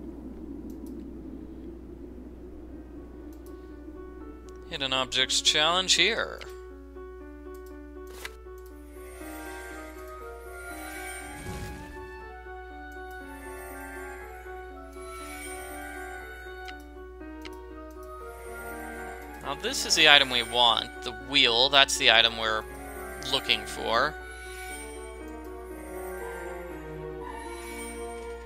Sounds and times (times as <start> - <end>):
Music: 2.4 - 28.4
Speech: 4.7 - 6.5, 19.4 - 22.6, 23.2 - 24.2.